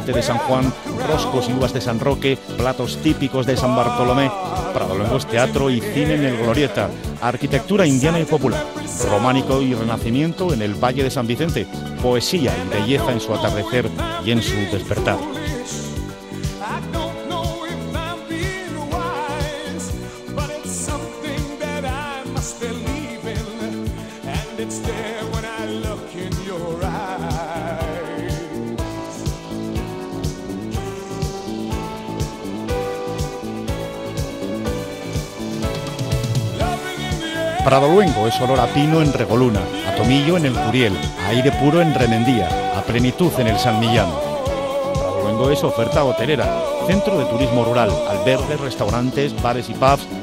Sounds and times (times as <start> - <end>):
Christmas music: 0.0 - 50.2.